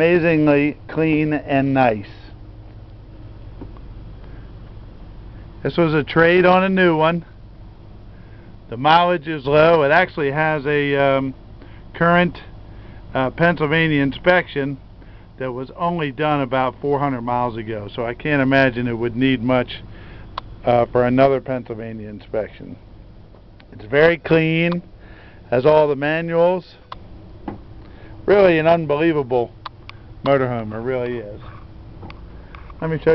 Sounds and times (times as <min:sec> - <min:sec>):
Speech: 0:00.0 - 0:02.4, 0:05.6 - 0:07.3, 0:08.7 - 0:11.4, 0:12.0 - 0:12.5, 0:13.1 - 0:14.8, 0:15.4 - 0:19.9, 0:20.6 - 0:22.8, 0:23.7 - 0:24.9, 0:25.5 - 0:26.8, 0:28.3 - 0:29.6, 0:30.2 - 0:31.5, 0:32.8 - 0:33.1.